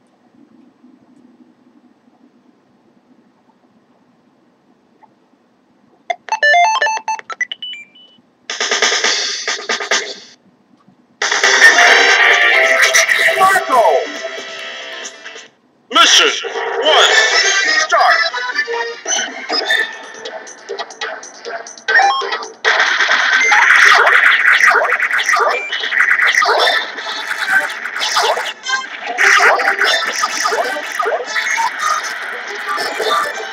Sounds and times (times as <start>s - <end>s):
Music: 8.5s - 10.4s, 11.2s - 15.6s, 16.9s - 23.6s, 32.0s - 33.5s.